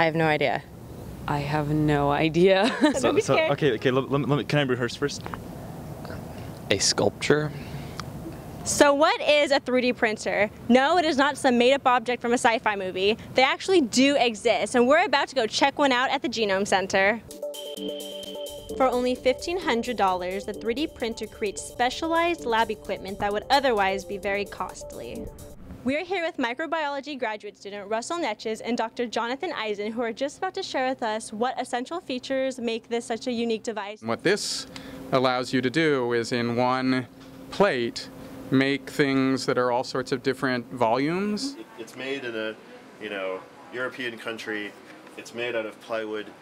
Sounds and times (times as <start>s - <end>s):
Music: 17.3s - 25.6s.